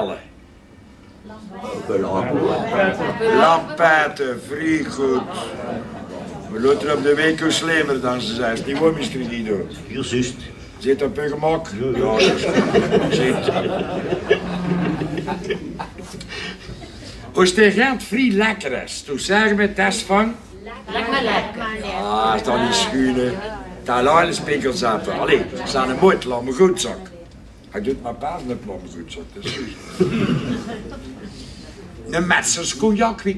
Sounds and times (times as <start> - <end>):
Speech: 1.3 - 5.8, 6.4 - 13.7, 17.3 - 29.6, 31.9 - 33.3.